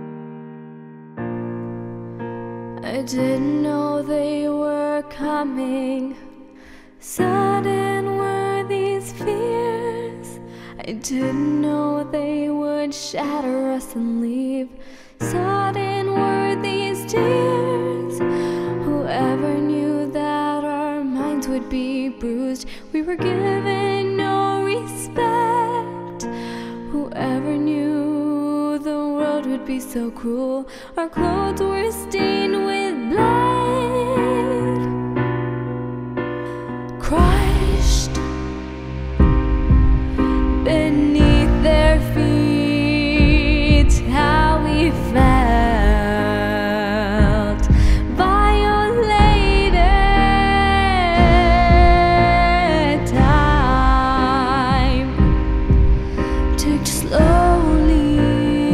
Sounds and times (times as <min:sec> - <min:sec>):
Music: 0:00.0 - 0:58.7.